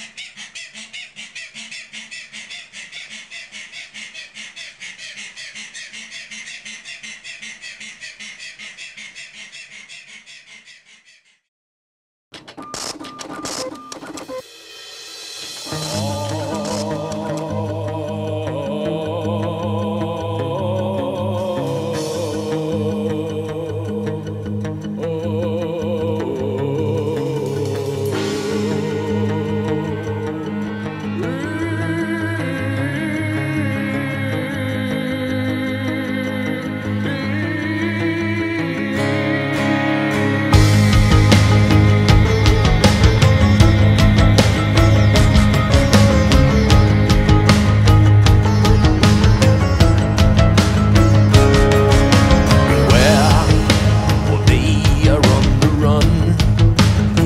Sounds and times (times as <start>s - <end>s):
Animal: 0.0s - 11.5s
Music: 14.3s - 57.2s.